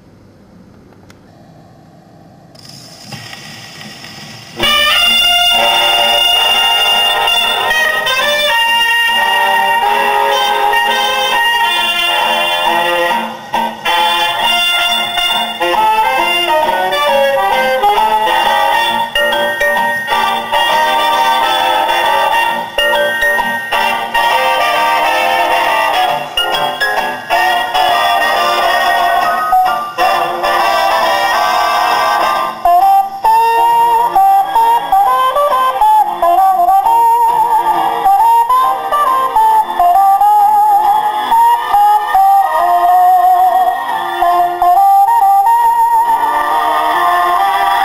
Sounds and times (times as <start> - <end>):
Music: 4.4 - 47.8.